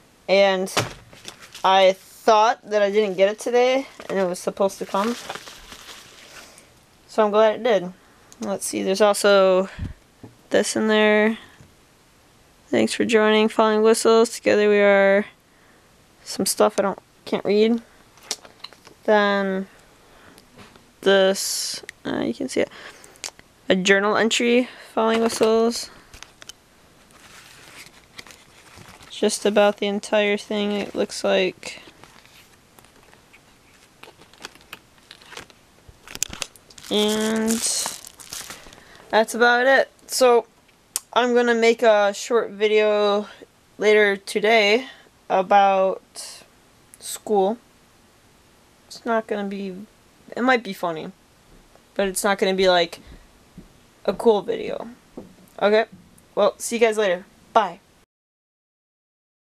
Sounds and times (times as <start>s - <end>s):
Speech: 0.3s - 0.8s, 1.6s - 5.2s, 7.1s - 9.8s, 10.5s - 11.4s, 12.7s - 15.3s, 16.2s - 17.9s, 19.1s - 19.7s, 21.0s - 22.7s, 23.7s - 26.0s, 29.1s - 31.9s, 36.9s - 38.0s, 39.1s - 47.6s, 48.9s - 51.2s, 52.0s - 53.0s, 54.1s - 55.0s, 55.6s - 57.8s
Crumpling, crinkling: 1.0s - 1.7s, 3.8s - 6.8s, 18.2s - 19.0s, 25.2s - 39.1s.